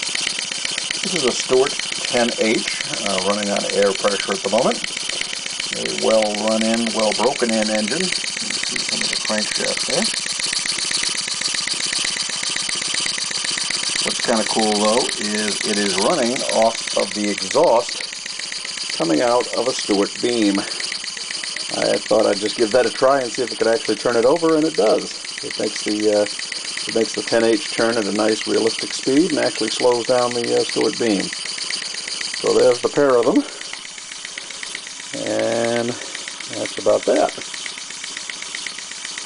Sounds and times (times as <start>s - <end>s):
Engine: 0.0s - 39.2s
Speech: 14.1s - 17.9s, 21.7s - 26.3s, 26.9s - 31.3s, 35.2s - 37.4s.